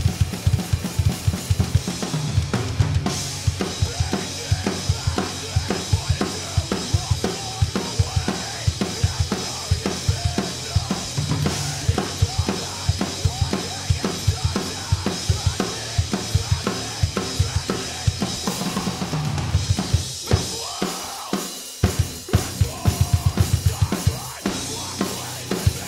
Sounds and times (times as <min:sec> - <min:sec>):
Bass drum: 0:00.0 - 0:20.8, 0:21.8 - 0:25.8
Drum kit: 0:00.0 - 0:25.8.